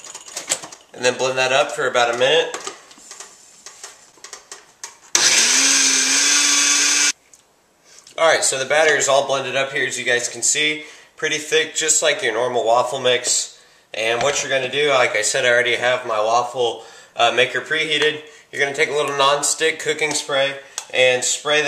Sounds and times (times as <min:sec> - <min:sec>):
Blender: 0:05.2 - 0:07.2.